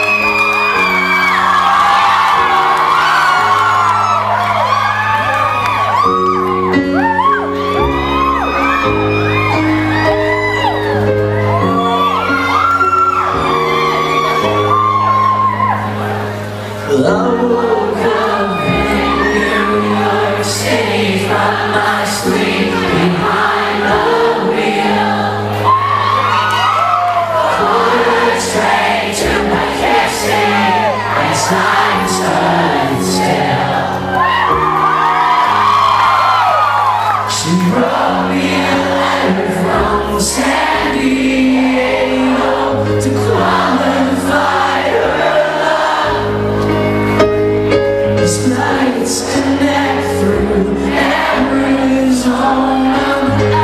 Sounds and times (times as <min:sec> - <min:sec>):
Music: 0:00.0 - 0:53.6.